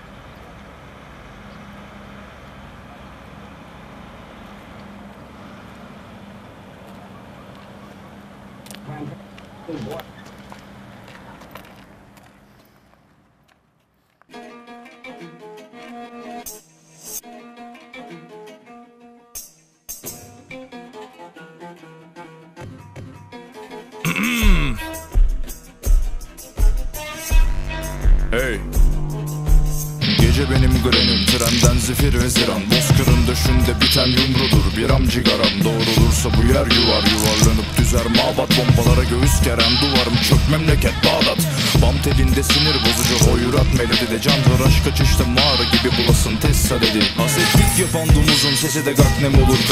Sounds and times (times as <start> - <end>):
Music: 14.3 - 49.7.